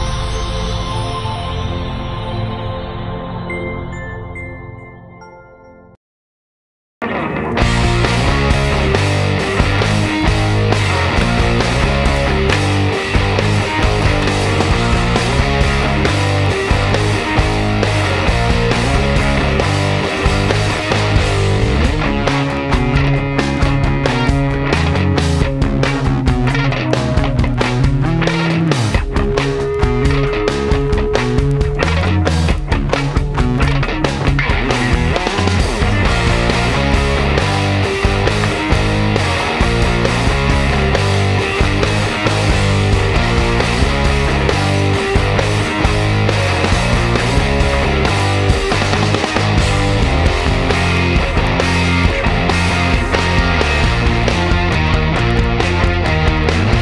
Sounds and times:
Music: 0.0 - 6.0, 7.0 - 56.8.

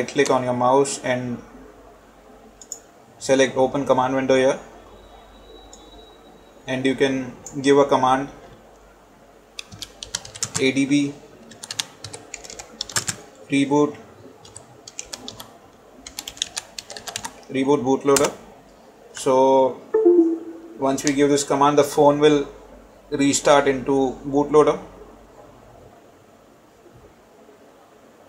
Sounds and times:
Speech: 0.0 - 1.5, 3.2 - 4.7, 6.7 - 8.4, 10.6 - 11.2, 13.5 - 14.0, 17.5 - 18.4, 19.2 - 24.9.

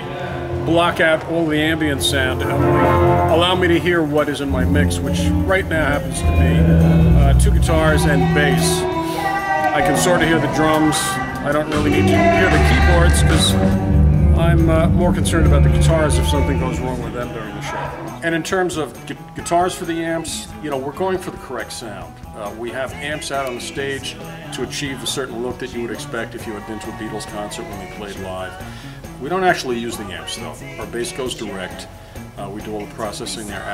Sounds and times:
Speech: 0.0 - 2.6, 3.3 - 8.9, 9.7 - 13.7, 14.4 - 28.6, 29.2 - 33.7
Music: 0.0 - 33.7.

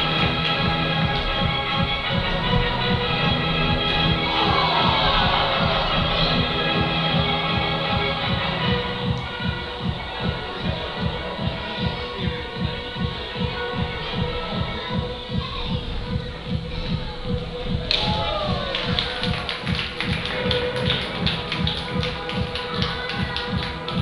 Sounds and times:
Music: 0.0 - 24.0.

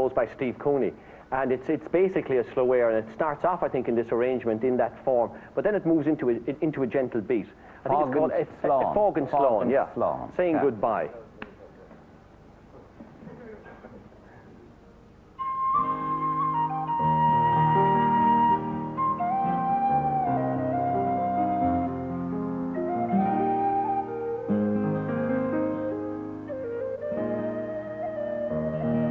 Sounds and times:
Speech: 0.0 - 11.8
Music: 14.5 - 29.1.

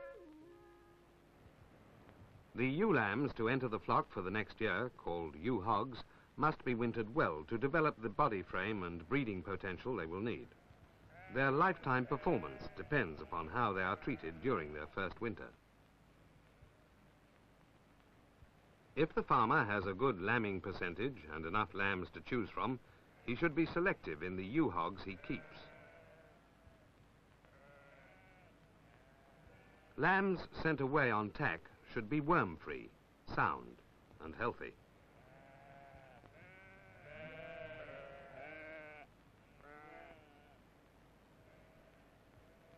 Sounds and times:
Speech: 2.6 - 10.5, 11.4 - 15.6, 19.0 - 25.7, 30.0 - 34.8
Bleat: 10.5 - 15.2, 22.9 - 23.5, 25.1 - 26.9, 27.5 - 30.2, 35.0 - 40.6, 41.4 - 42.7.

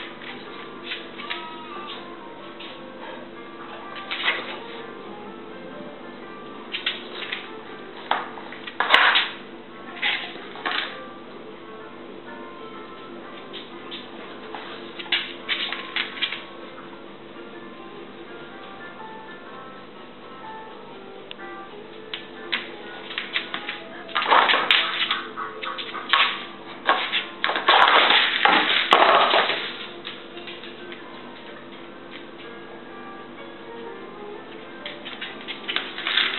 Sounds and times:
Music: 0.0 - 36.3
Domestic animals, pets: 24.6 - 27.3.

